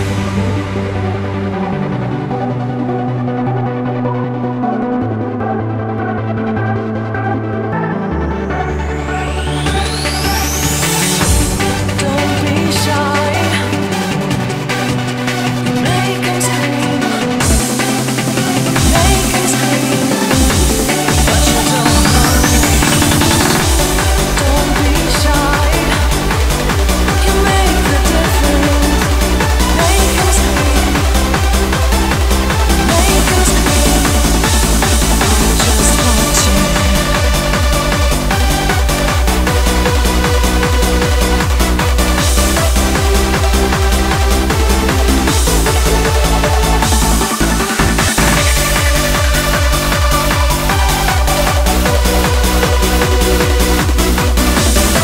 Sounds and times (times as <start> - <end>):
Music: 0.0 - 55.0.